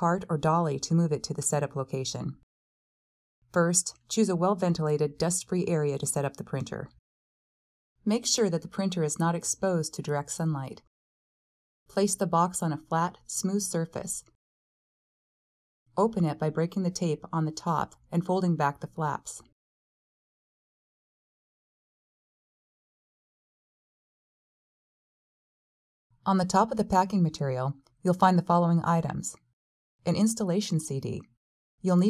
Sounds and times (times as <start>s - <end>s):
Speech: 0.0s - 2.5s, 3.5s - 7.0s, 8.1s - 10.9s, 11.9s - 14.4s, 16.0s - 19.5s, 26.3s - 29.4s, 30.1s - 32.1s.